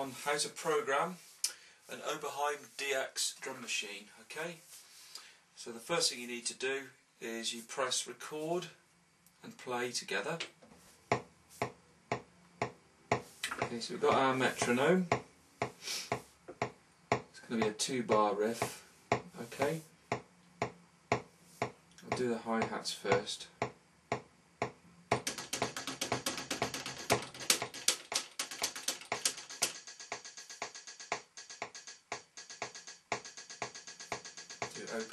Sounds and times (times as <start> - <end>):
Speech: 0.0 - 1.2, 1.9 - 4.7, 5.6 - 8.8, 9.4 - 10.5, 13.7 - 15.1, 17.4 - 18.7, 19.4 - 19.9, 22.0 - 23.6, 34.8 - 35.1.